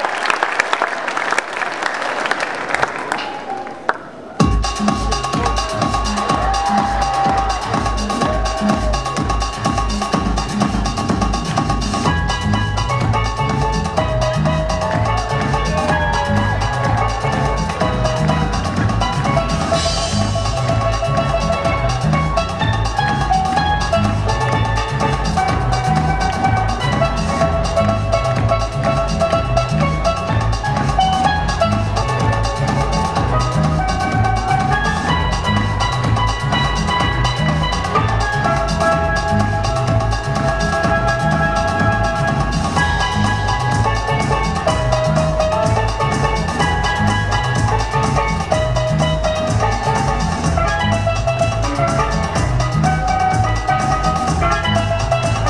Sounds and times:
Drum: 0:04.4 - 0:55.5.

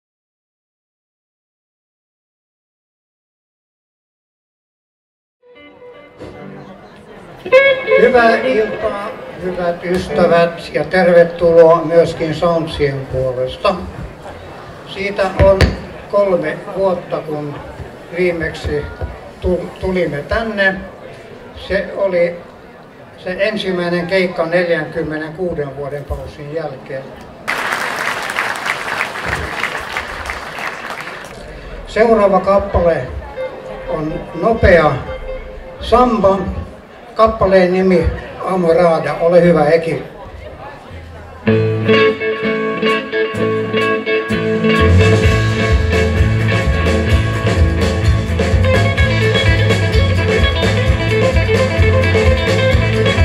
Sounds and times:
Speech: 0:06.6 - 0:27.3, 0:31.4 - 0:35.1, 0:35.8 - 0:41.5.

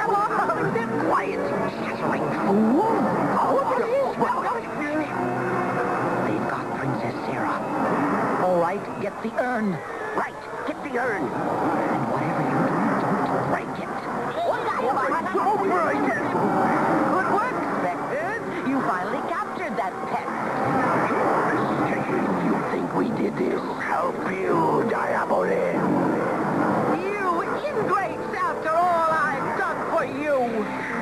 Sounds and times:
Music: 0:00.0 - 0:31.0.

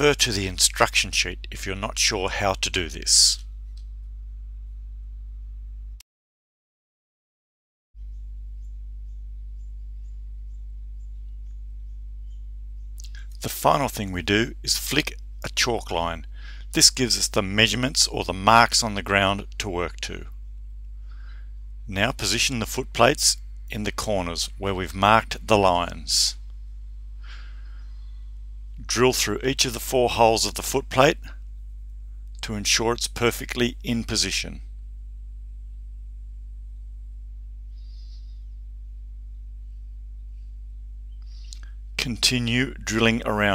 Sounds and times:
Speech: 0:00.0 - 0:03.4, 0:13.0 - 0:20.3, 0:21.9 - 0:26.4, 0:28.8 - 0:31.4, 0:32.4 - 0:34.7, 0:41.5 - 0:43.5.

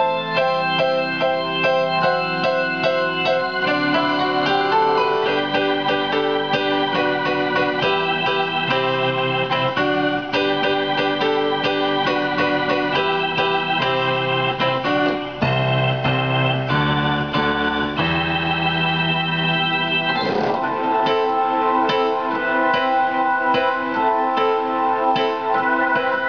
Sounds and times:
Electric piano: 0:00.0 - 0:26.2
Electronic organ: 0:00.0 - 0:26.2.

